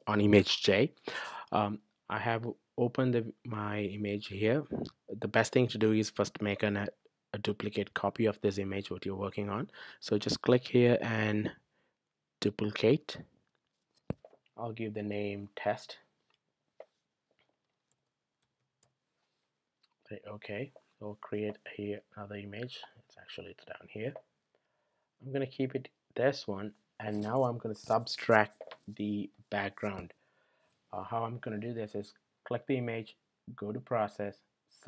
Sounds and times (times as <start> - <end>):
Speech: 0.0 - 11.6, 12.4 - 13.2, 14.6 - 16.1, 20.1 - 24.3, 25.2 - 30.2, 31.0 - 34.8.